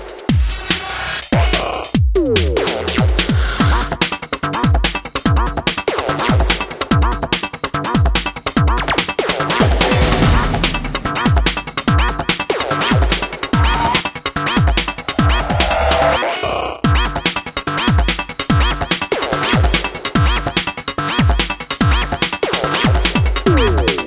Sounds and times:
Music: 0.0s - 24.0s.

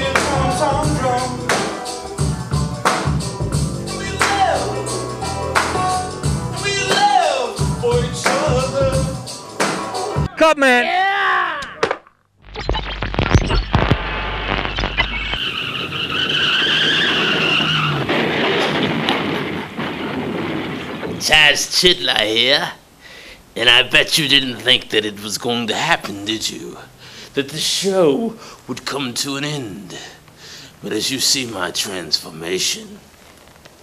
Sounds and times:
Music: 0.0s - 10.4s
Speech: 10.3s - 11.6s, 21.2s - 22.8s, 23.6s - 30.2s, 30.8s - 33.0s.

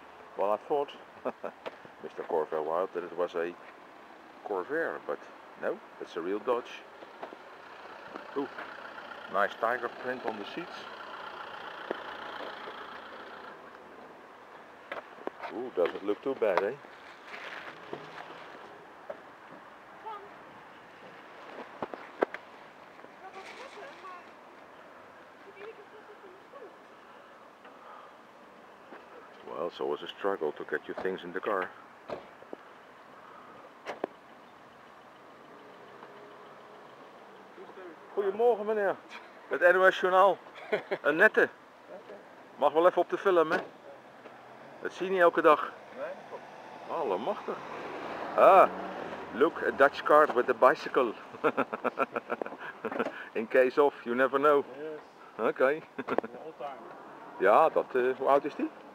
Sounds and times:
Speech: 2.0s - 3.6s, 9.3s - 10.9s, 49.4s - 51.2s.

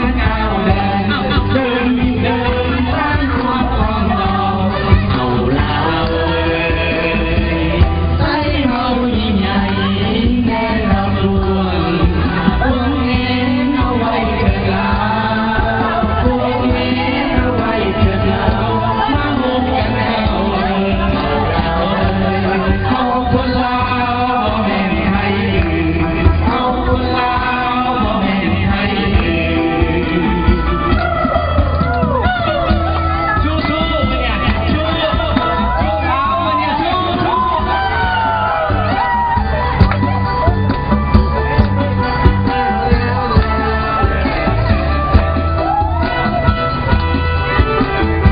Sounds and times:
Music: 0.0s - 48.3s.

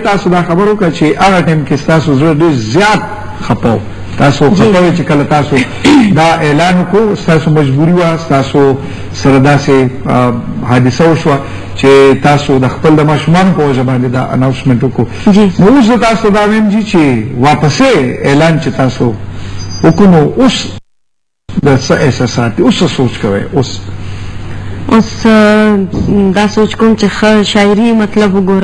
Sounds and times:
Speech: 0.0s - 19.2s, 19.8s - 20.8s, 21.5s - 23.9s, 24.9s - 28.6s.

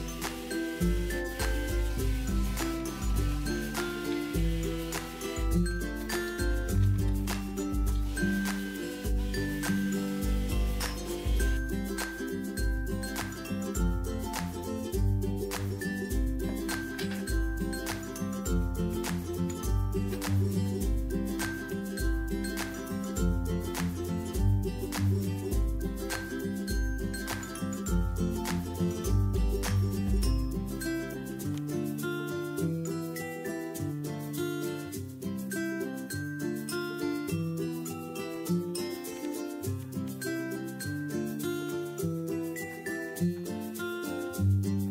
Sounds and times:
Music: 0.0s - 44.9s.

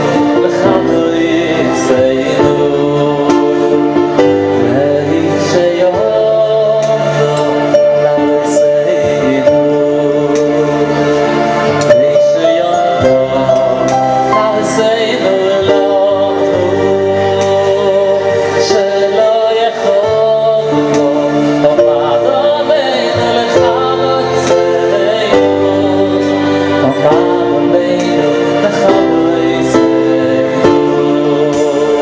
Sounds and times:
Male singing: 0.0s - 32.0s
Music: 0.0s - 32.0s.

